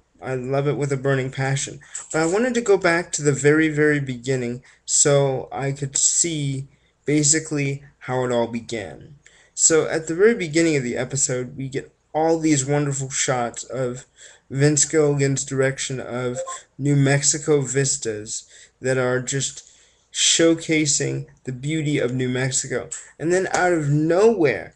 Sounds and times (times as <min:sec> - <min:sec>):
Speech: 0:00.0 - 0:24.7.